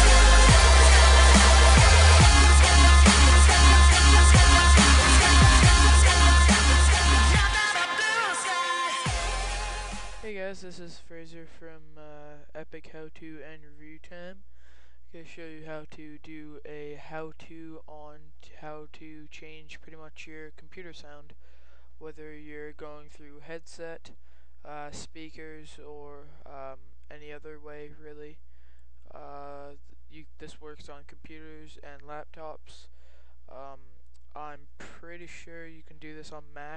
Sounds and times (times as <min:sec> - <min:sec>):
Speech: 0:10.2 - 0:14.4, 0:15.1 - 0:21.4, 0:22.0 - 0:28.4, 0:29.1 - 0:32.9, 0:33.5 - 0:36.7.